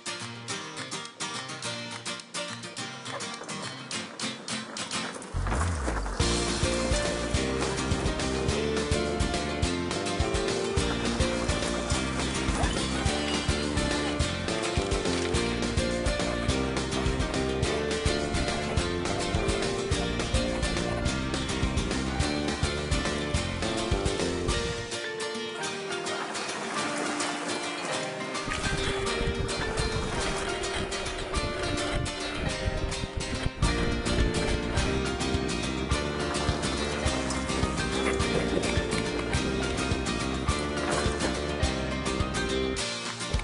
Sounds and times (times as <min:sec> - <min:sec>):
Music: 0:00.0 - 0:43.4
Bicycle: 0:02.8 - 0:25.0, 0:25.6 - 0:43.4.